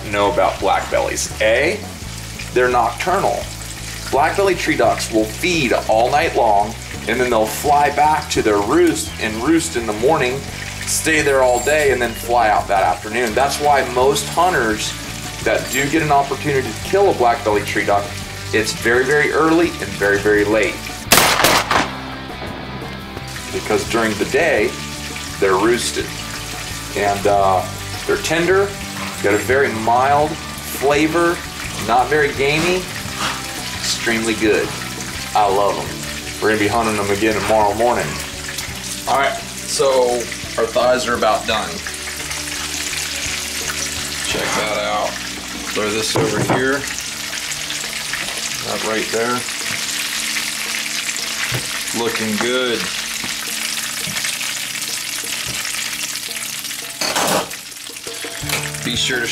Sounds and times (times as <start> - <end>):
Frying (food): 0.0 - 59.3.